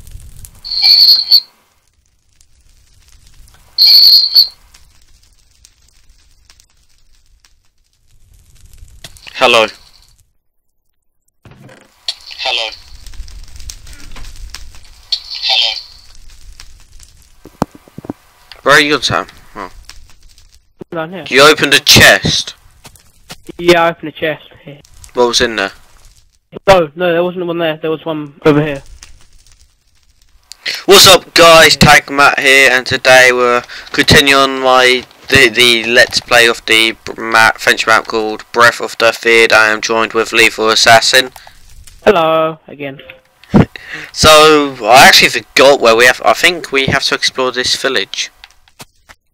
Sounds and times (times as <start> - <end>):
Speech: 9.3 - 9.8, 12.1 - 12.8, 15.2 - 15.8, 18.6 - 19.7, 20.8 - 22.6, 23.5 - 25.8, 26.6 - 28.9, 30.7 - 41.4, 42.0 - 48.4.